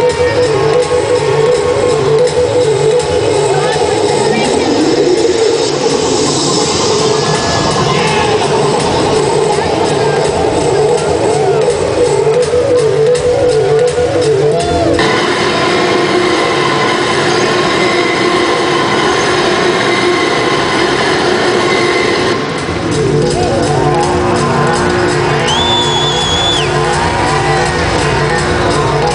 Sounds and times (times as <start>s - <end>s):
Speech: 3.1s - 4.9s.